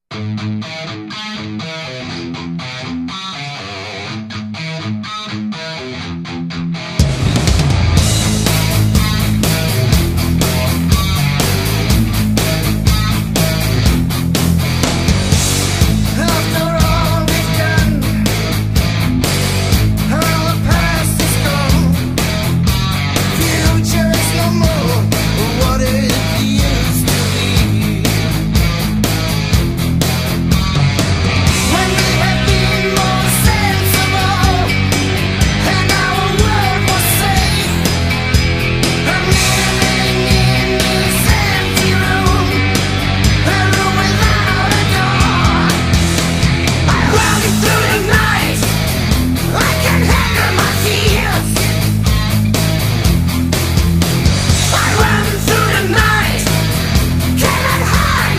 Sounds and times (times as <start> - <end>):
Music: 0.0 - 58.3.